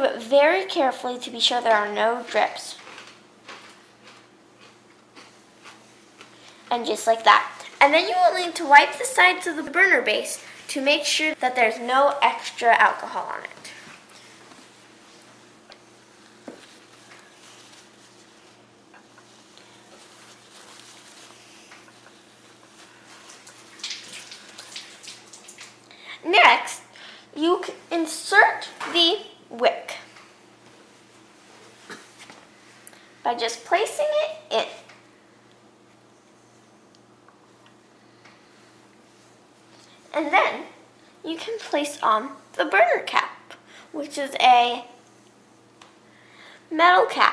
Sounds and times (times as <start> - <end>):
Speech: 0.0 - 2.8, 6.7 - 13.8, 26.2 - 30.1, 33.2 - 34.9, 40.1 - 45.0, 46.7 - 47.3
Bathtub (filling or washing): 19.6 - 26.9.